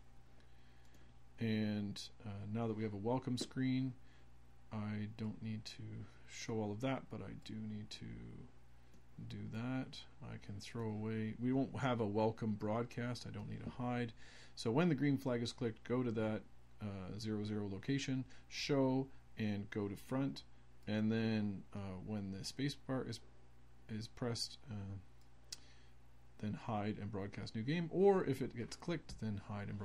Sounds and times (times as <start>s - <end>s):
Speech: 1.4s - 4.0s, 4.7s - 8.6s, 9.2s - 23.3s, 23.9s - 25.1s, 26.4s - 29.8s.